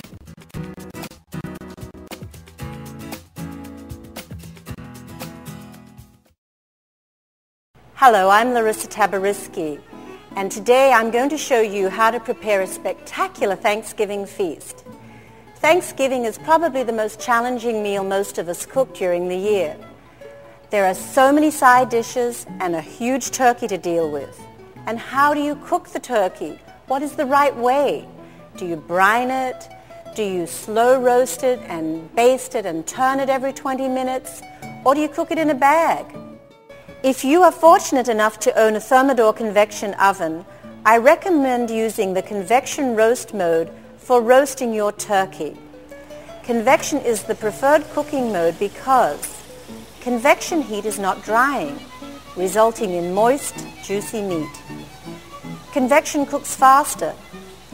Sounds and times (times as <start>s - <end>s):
Music: 0.0s - 6.4s, 7.8s - 57.7s
Speech: 8.0s - 14.8s, 15.6s - 19.8s, 20.7s - 28.0s, 28.6s - 29.6s, 30.2s - 36.1s, 37.1s - 45.6s, 46.5s - 49.4s, 50.0s - 51.8s, 52.4s - 54.6s, 55.8s - 57.2s.